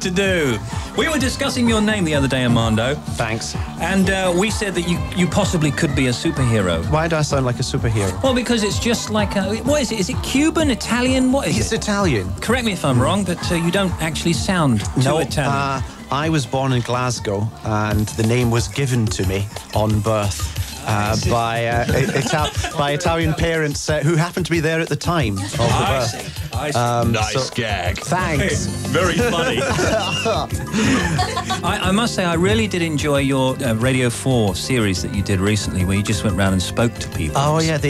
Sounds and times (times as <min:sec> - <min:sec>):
Speech: 0:00.0 - 0:30.5, 0:31.5 - 0:37.8
Music: 0:00.0 - 0:37.8.